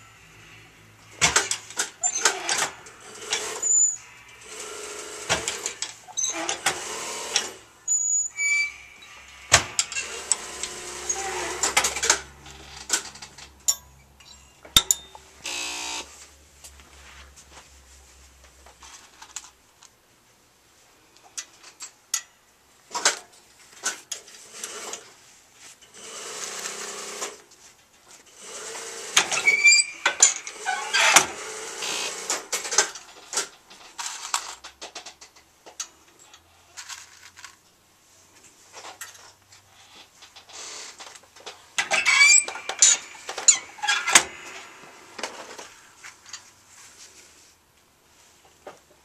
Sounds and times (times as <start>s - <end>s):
Sewing machine: 1.2s - 7.6s, 9.6s - 12.3s, 26.0s - 27.4s, 28.3s - 32.9s
Tools: 1.2s - 15.8s, 29.2s - 37.6s, 40.0s - 46.5s.